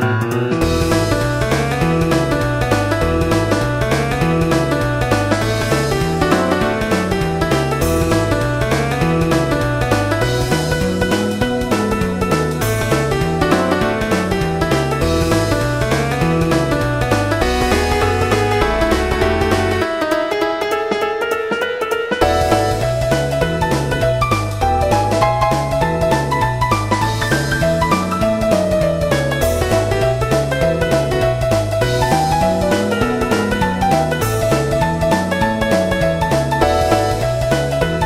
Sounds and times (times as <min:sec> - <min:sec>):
Music: 0:00.0 - 0:38.0.